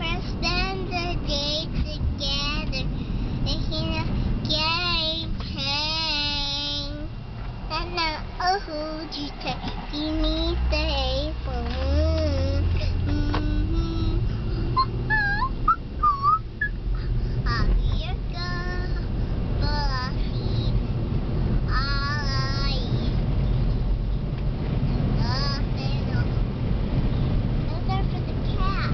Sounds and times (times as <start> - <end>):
Child singing: 0.0 - 2.9, 3.5 - 7.1, 7.7 - 14.2, 17.5 - 19.0, 19.6 - 20.8, 21.7 - 23.2, 25.2 - 26.3, 27.7 - 28.9.